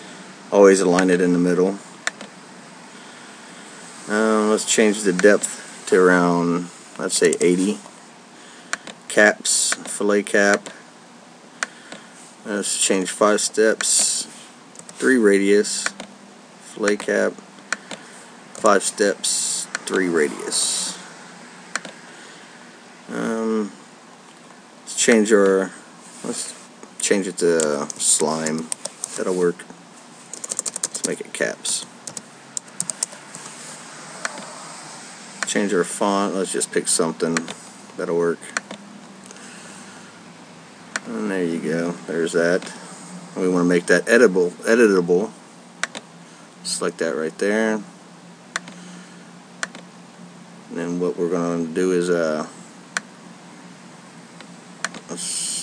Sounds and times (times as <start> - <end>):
Speech: 0.5 - 1.8, 4.1 - 7.8, 9.1 - 10.8, 12.4 - 14.4, 15.0 - 16.0, 16.6 - 17.4, 18.6 - 21.0, 23.1 - 23.8, 24.9 - 29.7, 31.0 - 31.9, 35.5 - 38.6, 41.0 - 42.8, 43.4 - 45.4, 46.6 - 47.9, 50.7 - 52.6, 55.1 - 55.6.